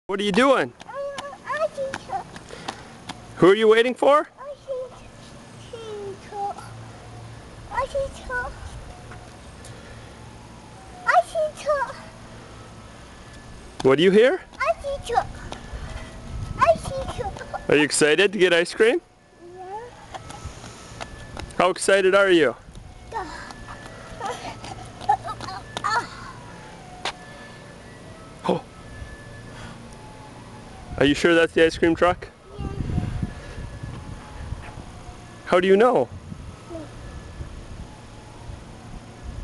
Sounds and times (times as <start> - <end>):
Child speech, kid speaking: 0.8 - 2.4, 4.2 - 6.8, 7.7 - 8.8, 11.0 - 12.1, 14.5 - 15.6, 16.6 - 17.9, 19.4 - 20.0, 23.1 - 23.6, 24.2 - 26.2, 32.4 - 33.0, 36.6 - 37.0.